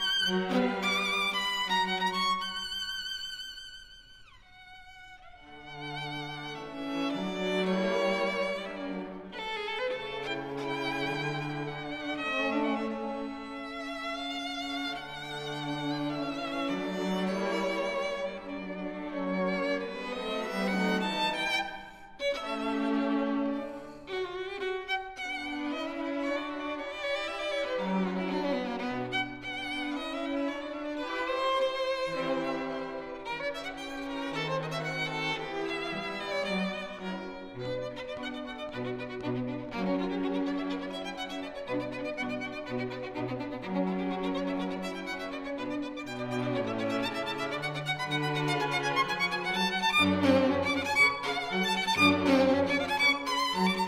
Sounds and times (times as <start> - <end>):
Cello: 0.0 - 53.8
Classical music: 0.0 - 53.8
Orchestra: 0.0 - 53.8
Violin, fiddle: 0.0 - 53.8.